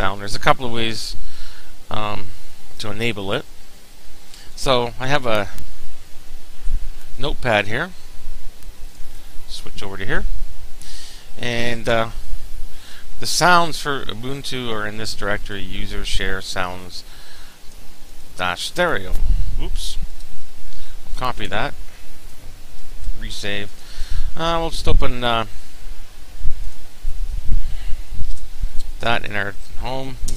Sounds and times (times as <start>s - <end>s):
Speech: 0.0s - 1.2s, 1.9s - 3.5s, 4.6s - 5.6s, 7.2s - 8.0s, 9.5s - 10.3s, 11.4s - 12.2s, 13.2s - 17.1s, 18.4s - 20.0s, 21.2s - 21.8s, 23.2s - 23.7s, 24.4s - 25.5s, 29.0s - 30.2s.